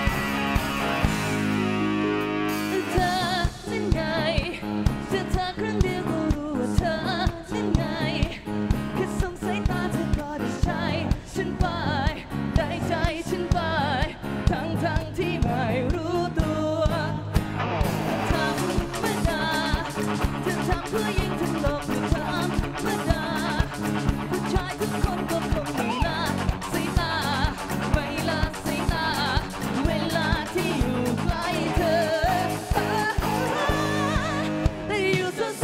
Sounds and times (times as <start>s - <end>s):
Independent music: 0.0s - 35.6s.